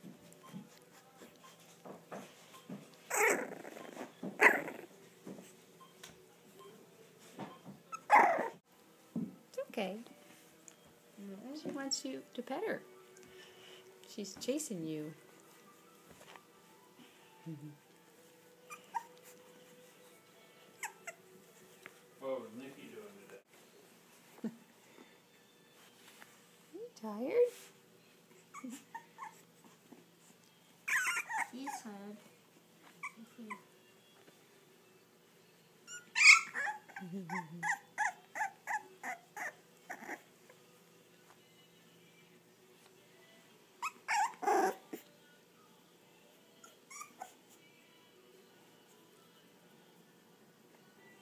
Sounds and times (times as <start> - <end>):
Dog: 18.7 - 19.9, 28.5 - 31.8, 43.8 - 45.1.